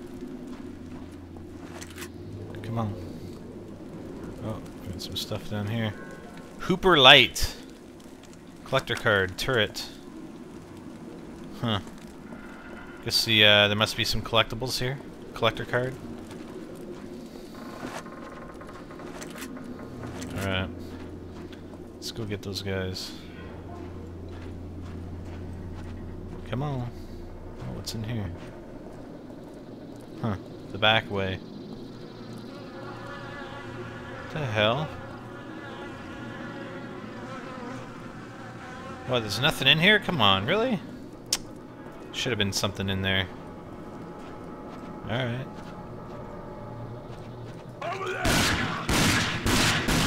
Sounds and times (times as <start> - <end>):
Speech: 6.6 - 7.6, 39.1 - 40.9, 42.2 - 43.3.